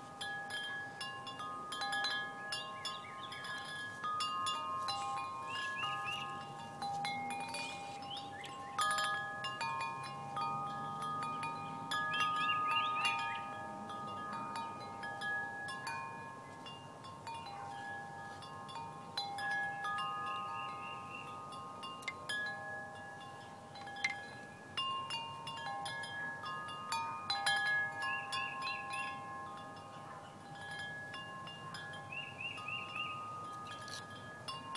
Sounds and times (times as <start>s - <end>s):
Wind chime: 0.0s - 34.7s.